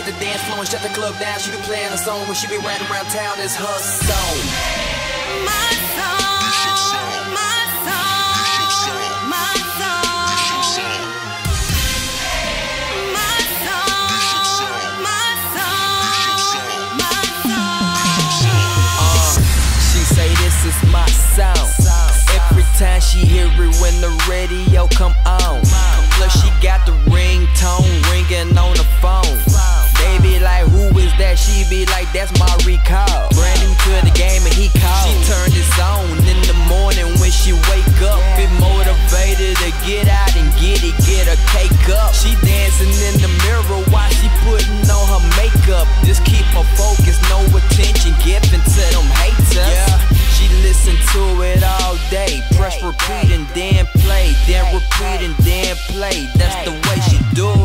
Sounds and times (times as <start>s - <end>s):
Dance music: 0.0s - 57.6s.